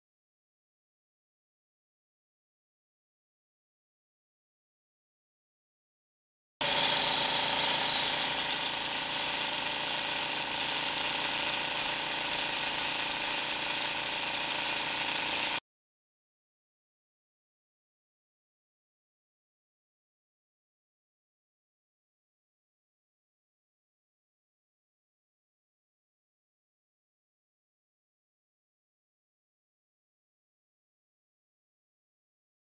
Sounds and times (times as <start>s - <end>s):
Tools: 6.6s - 15.6s.